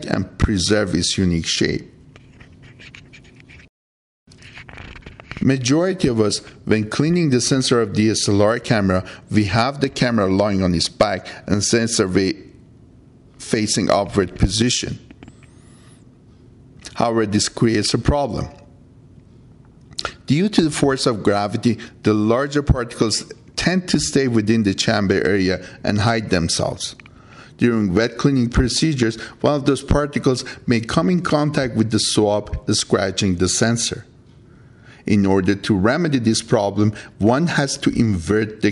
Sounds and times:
Speech: 0.0 - 2.0, 5.4 - 12.6, 13.4 - 15.1, 16.8 - 18.7, 20.0 - 27.0, 27.6 - 34.1, 35.0 - 38.7.

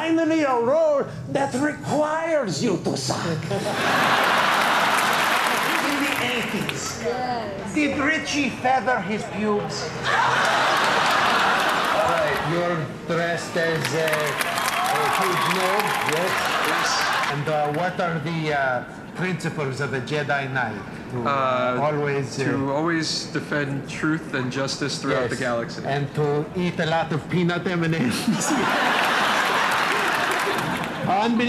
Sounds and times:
Speech: 15.1 - 28.3.

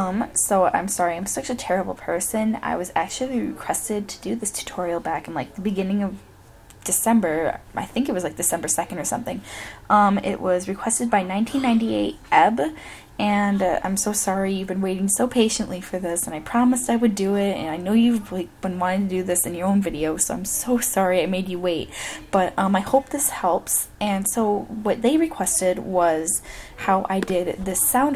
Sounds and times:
Speech: 0.0 - 6.2, 6.8 - 28.1.

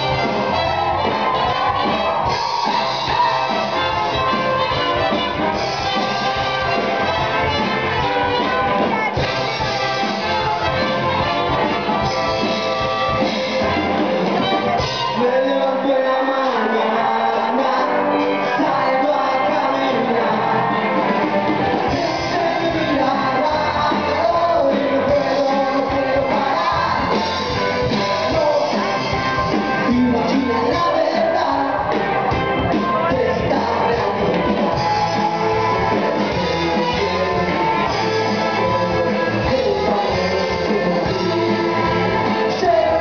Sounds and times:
Crowd: 0.0 - 43.0
Inside, large room or hall: 0.0 - 43.0
Music: 0.0 - 43.0.

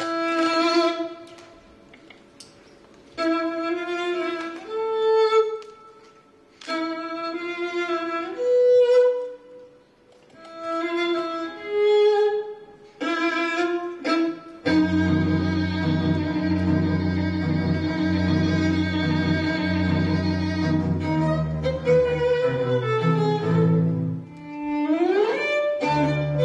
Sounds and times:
Music: 3.2 - 9.5, 10.4 - 26.4.

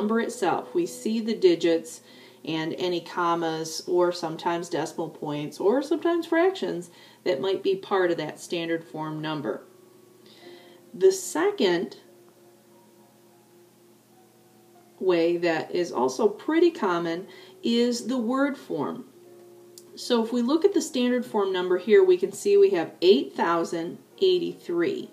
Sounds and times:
Speech: 0.0 - 9.6, 11.0 - 12.0, 15.0 - 19.1, 20.0 - 25.1.

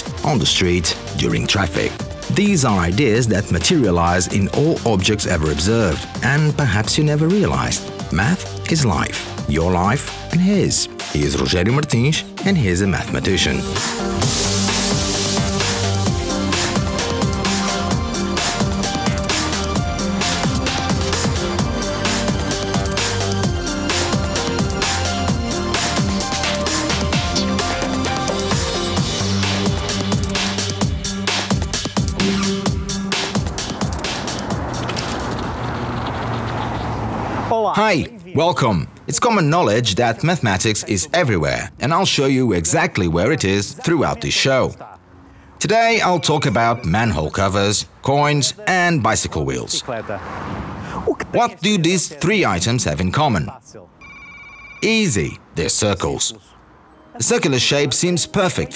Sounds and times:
Music: 0.0 - 35.5, 56.8 - 58.7
Speech: 0.2 - 13.8, 37.5 - 45.0, 45.6 - 50.2, 51.1 - 53.9, 54.8 - 56.6, 57.2 - 58.7.

